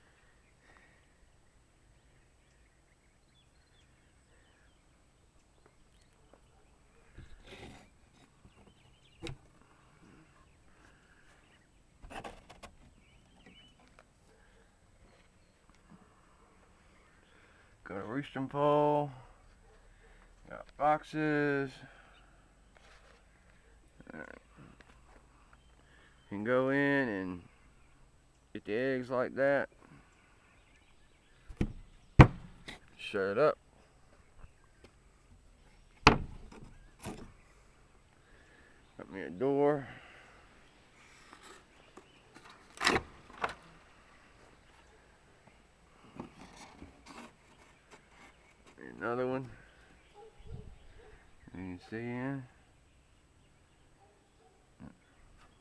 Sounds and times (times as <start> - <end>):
Speech: 17.8 - 19.2, 20.5 - 21.9, 24.0 - 24.4, 26.3 - 27.5, 28.5 - 29.7, 33.0 - 33.6, 39.0 - 40.0, 48.8 - 49.6, 51.5 - 52.6.